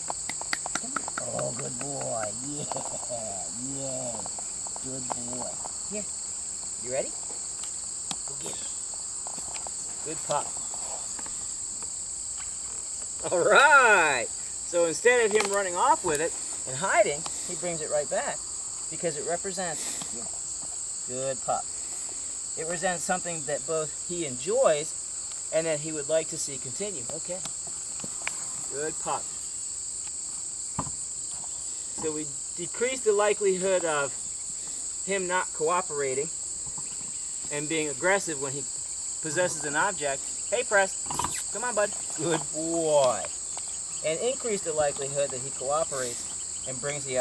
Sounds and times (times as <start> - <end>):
Cricket: 0.0 - 47.2.